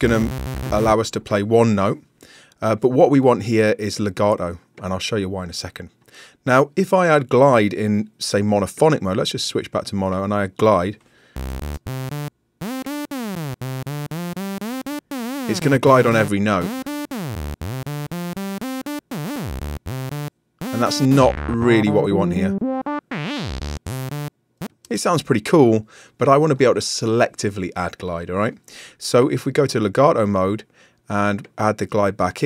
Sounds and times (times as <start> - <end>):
Synthesizer: 0.0 - 1.0, 11.4 - 24.3.